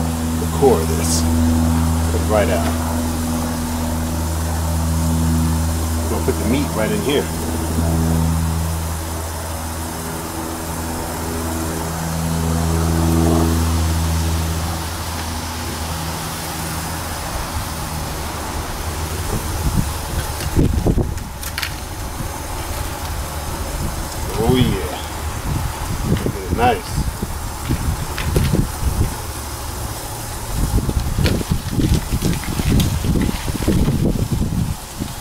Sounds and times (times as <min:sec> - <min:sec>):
Vehicle: 0:00.0 - 0:35.2
Speech: 0:00.4 - 0:01.3, 0:02.1 - 0:02.8, 0:06.1 - 0:07.3, 0:24.3 - 0:25.2, 0:26.2 - 0:27.1.